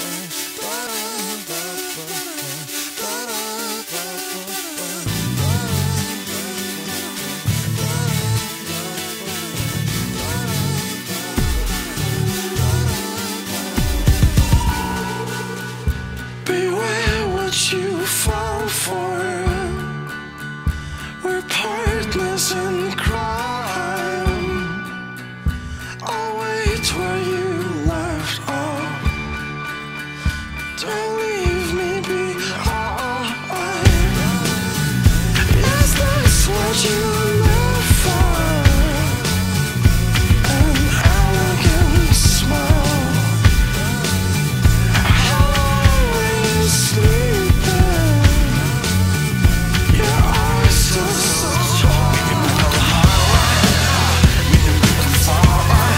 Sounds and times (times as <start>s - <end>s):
Music: 0.0s - 55.9s.